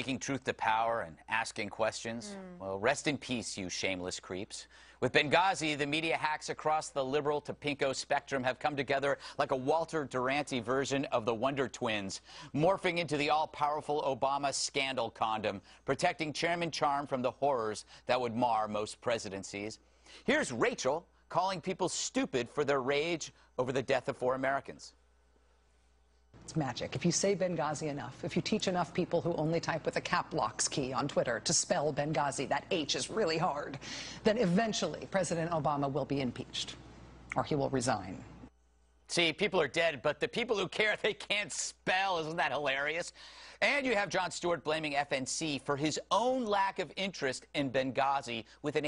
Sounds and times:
Speech: 0:00.0 - 0:25.0, 0:39.1 - 0:48.8.

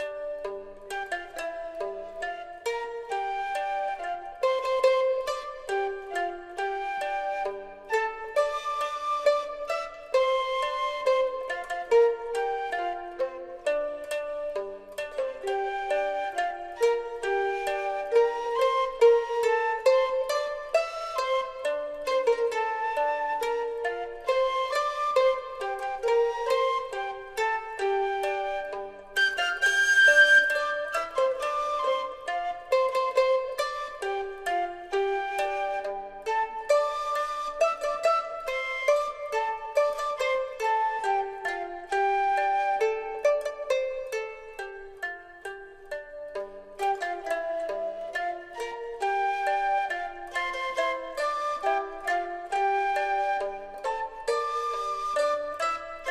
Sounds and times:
Music: 0:00.0 - 0:56.1.

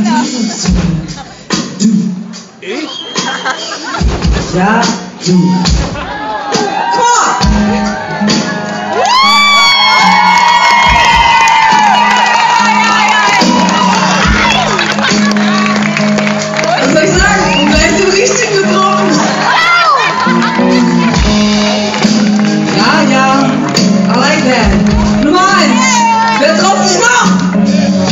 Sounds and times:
Music: 0:00.0 - 0:28.1.

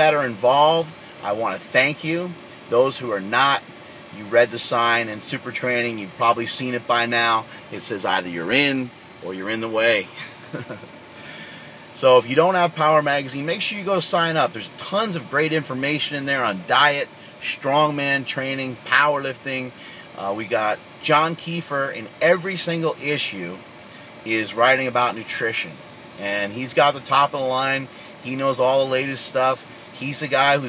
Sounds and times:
Speech: 0:00.0 - 0:03.6, 0:04.2 - 0:10.1, 0:12.0 - 0:23.6, 0:24.3 - 0:30.6.

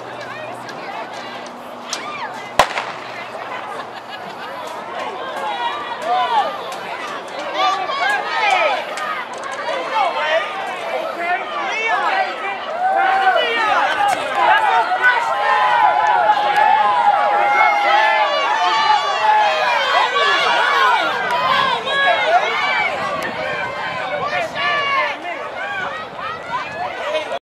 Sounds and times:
Outside, urban or manmade: 0:00.0 - 0:27.4
Run: 0:00.0 - 0:27.4.

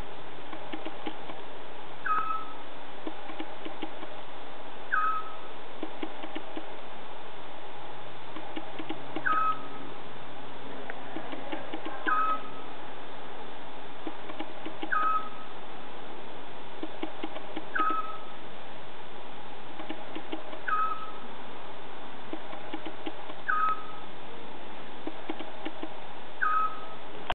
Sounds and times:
Bird: 0:02.0 - 0:02.7, 0:04.9 - 0:05.5, 0:09.2 - 0:09.9, 0:11.2 - 0:12.7, 0:14.7 - 0:15.6, 0:17.0 - 0:18.4, 0:19.9 - 0:21.3, 0:22.7 - 0:24.1, 0:26.4 - 0:27.1.

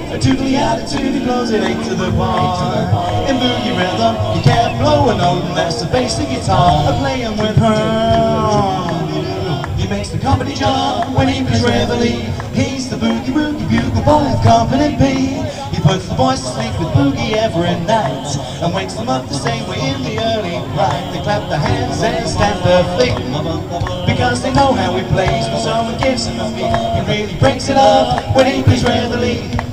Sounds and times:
Speech: 0:00.0 - 0:29.5.

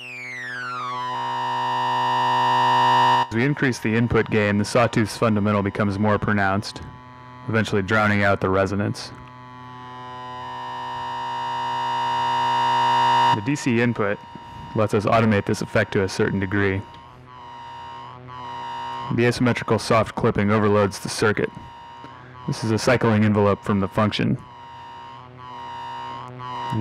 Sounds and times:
Speech: 0:03.3 - 0:06.9, 0:07.5 - 0:09.2, 0:13.4 - 0:14.2, 0:14.8 - 0:16.9, 0:19.1 - 0:21.6, 0:22.5 - 0:24.4.

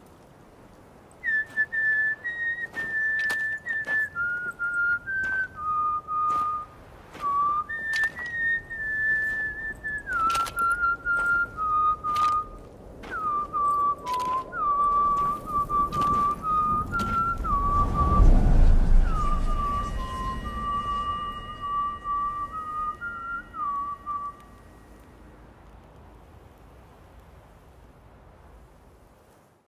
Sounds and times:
Whistling: 0:01.1 - 0:25.1
Music: 0:16.9 - 0:25.0.

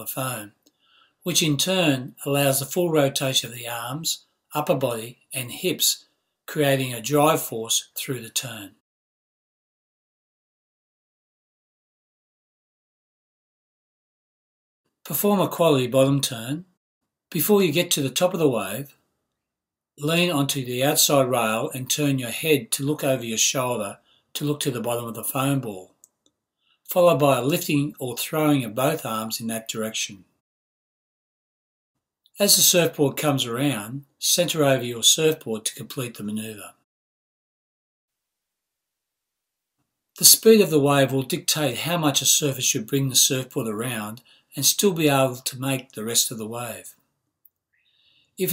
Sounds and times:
Speech: 0:00.0 - 0:00.6, 0:01.2 - 0:08.8, 0:15.1 - 0:16.8, 0:17.4 - 0:19.0, 0:20.0 - 0:26.0, 0:26.9 - 0:30.3, 0:32.4 - 0:36.9, 0:40.2 - 0:47.0.

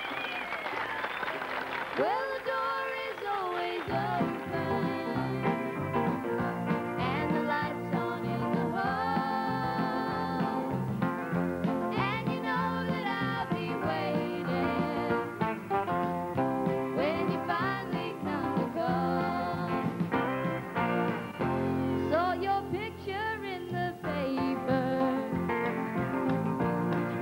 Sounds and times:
Music: 0:02.1 - 0:27.2.

